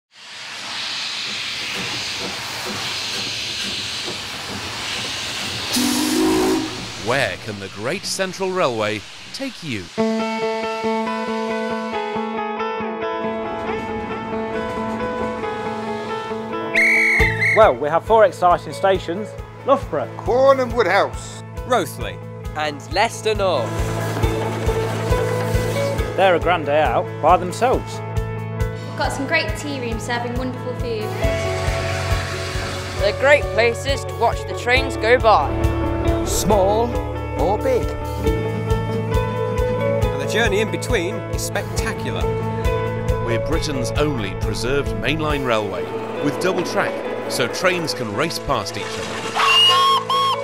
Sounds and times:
Hiss: 0.1 - 10.2.

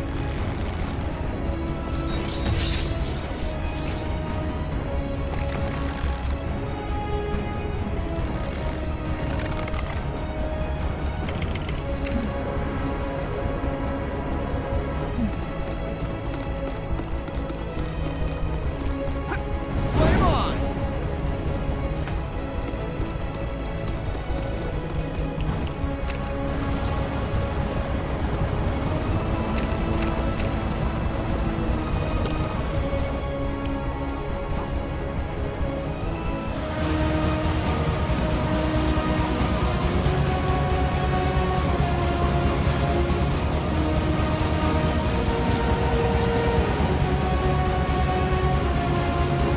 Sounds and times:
Music: 0.0 - 49.5.

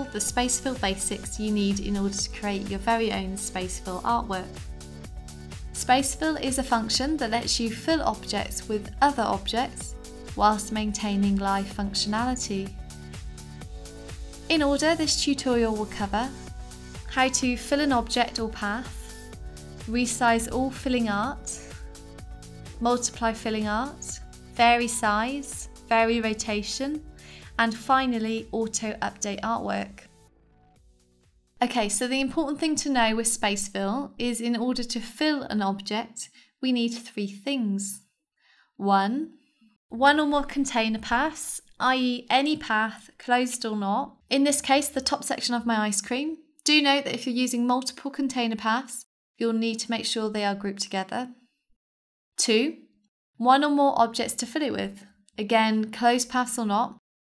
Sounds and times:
Speech: 0.0 - 4.6, 5.8 - 12.8, 14.5 - 16.4, 17.1 - 19.1, 19.9 - 21.7, 22.8 - 27.0, 27.6 - 30.0, 31.6 - 38.0, 38.8 - 39.3, 39.9 - 51.4, 52.4 - 52.8, 53.4 - 57.0
Music: 0.0 - 35.9, 39.7 - 46.9.

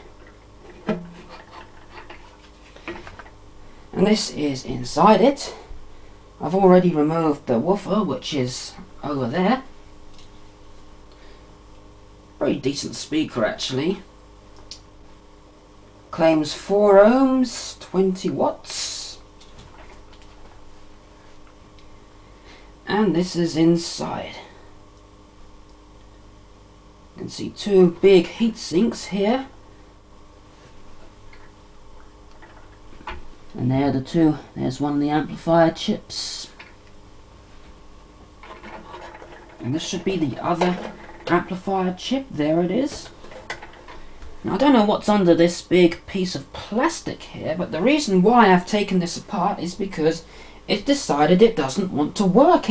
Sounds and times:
Speech: 4.0 - 5.7, 6.4 - 9.7, 12.4 - 14.1, 16.1 - 19.2, 22.9 - 24.6, 27.2 - 29.6, 33.5 - 36.6, 39.6 - 43.1, 44.4 - 52.7.

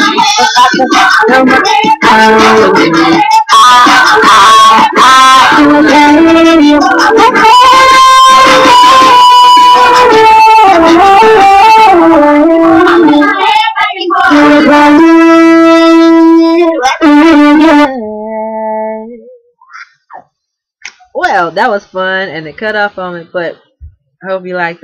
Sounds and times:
Music: 0.0 - 17.9.

